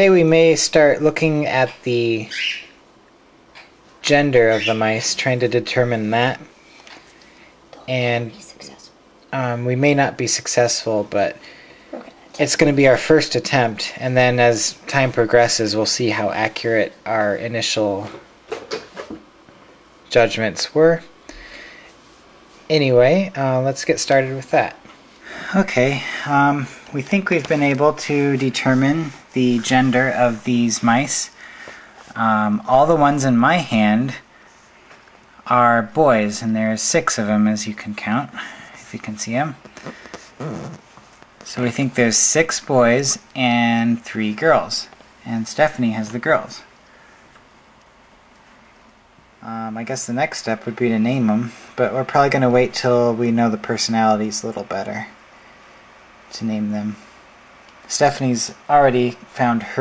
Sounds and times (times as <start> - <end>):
Speech: 0.0 - 2.6, 4.0 - 6.5, 7.7 - 18.3, 20.1 - 21.2, 22.7 - 31.4, 32.1 - 34.3, 35.4 - 39.7, 41.4 - 46.7, 49.4 - 55.2, 56.3 - 57.1, 57.9 - 59.8.